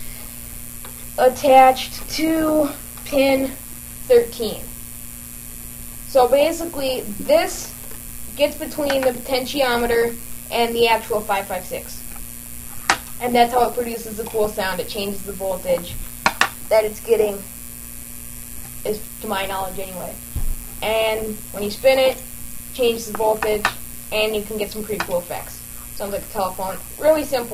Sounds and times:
Hum: 0:00.0 - 0:27.5
Mains hum: 0:00.0 - 0:27.5.

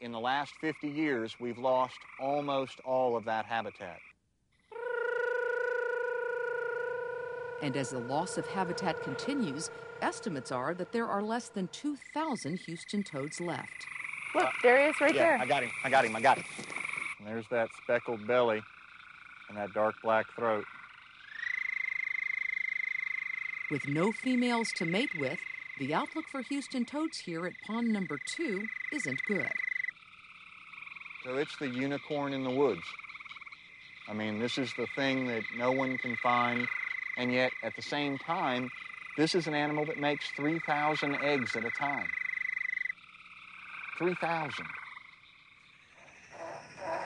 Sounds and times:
Croak: 0:00.0 - 0:47.0.

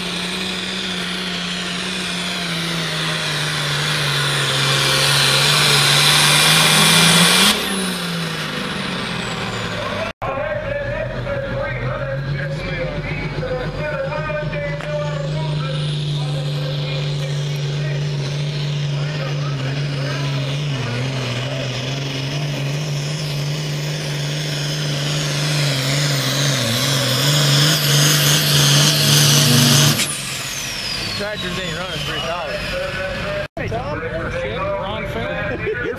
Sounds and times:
Heavy engine (low frequency): 0:00.0 - 0:35.9
Outside, urban or manmade: 0:00.0 - 0:35.9
Vehicle: 0:00.0 - 0:35.9
Speech: 0:09.8 - 0:18.2, 0:18.9 - 0:20.6, 0:31.2 - 0:35.9.

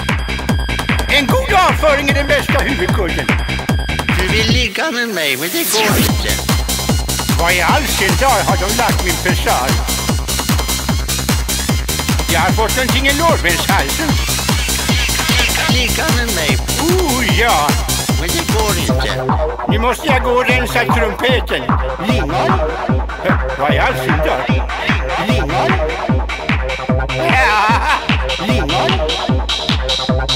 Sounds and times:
Techno: 0:00.0 - 0:30.3.

